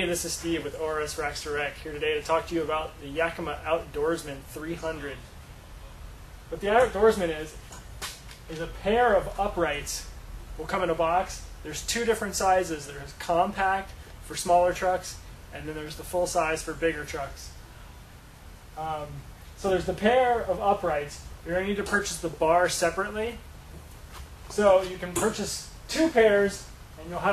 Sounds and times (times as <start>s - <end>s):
Speech: 0.0s - 5.3s, 6.5s - 7.6s, 8.5s - 17.6s, 18.8s - 23.5s, 24.5s - 27.3s.